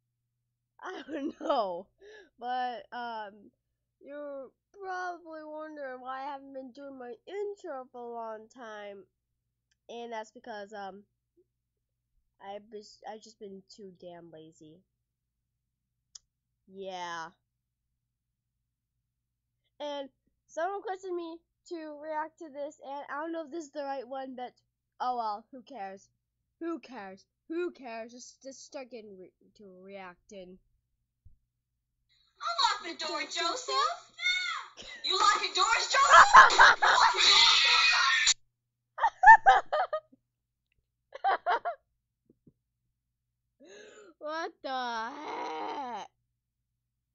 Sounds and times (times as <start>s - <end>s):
Speech: 1.4s - 3.5s, 4.1s - 9.1s, 9.9s - 11.0s, 12.4s - 14.8s, 16.7s - 17.4s, 19.8s - 30.6s, 32.4s - 36.4s.